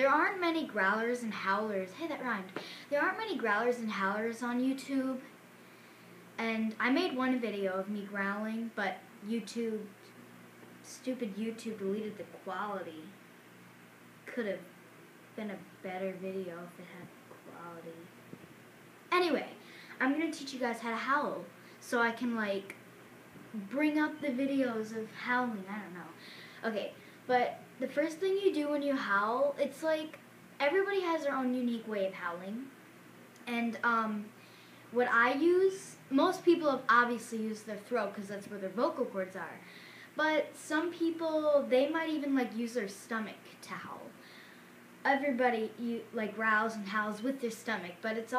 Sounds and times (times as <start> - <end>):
Speech: 0.0 - 5.3, 6.4 - 10.0, 10.8 - 13.2, 14.3 - 14.7, 15.4 - 18.1, 19.1 - 22.8, 23.5 - 32.8, 33.4 - 34.3, 34.9 - 39.6, 40.2 - 44.2, 45.0 - 48.3.